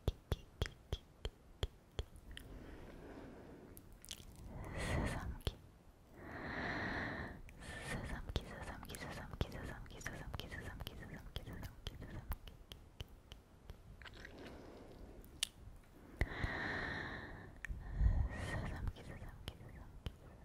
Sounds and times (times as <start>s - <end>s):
Whispering: 0.0s - 2.2s, 4.5s - 5.6s, 7.4s - 12.8s, 17.6s - 20.4s.